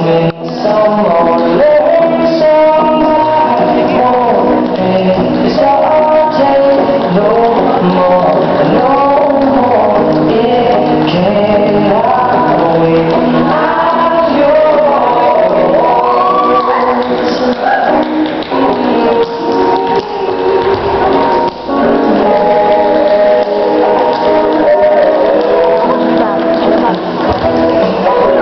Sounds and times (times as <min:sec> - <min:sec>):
Music: 0:00.0 - 0:28.4.